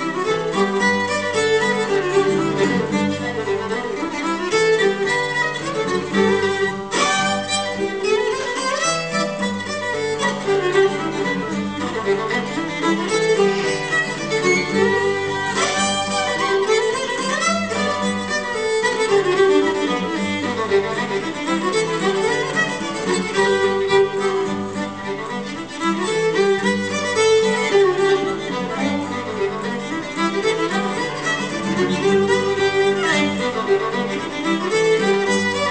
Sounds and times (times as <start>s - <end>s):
Violin, fiddle: 0.0s - 35.7s.